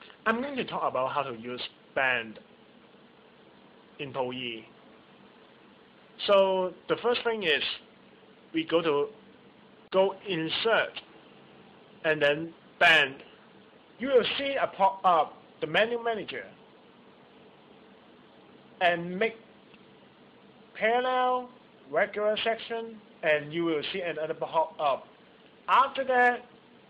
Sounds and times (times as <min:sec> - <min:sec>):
Speech: 0:00.2 - 0:02.5, 0:04.0 - 0:04.8, 0:06.2 - 0:07.9, 0:08.5 - 0:09.2, 0:09.9 - 0:11.1, 0:12.0 - 0:13.4, 0:14.0 - 0:16.6, 0:18.8 - 0:19.5, 0:20.7 - 0:25.1, 0:25.7 - 0:26.5.